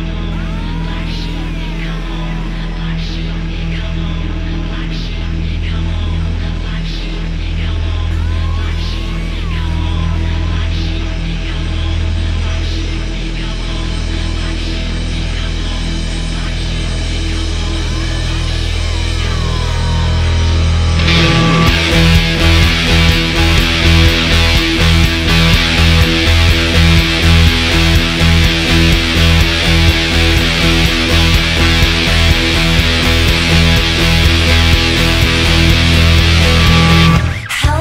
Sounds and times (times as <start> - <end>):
Strum: 0.0 - 37.8.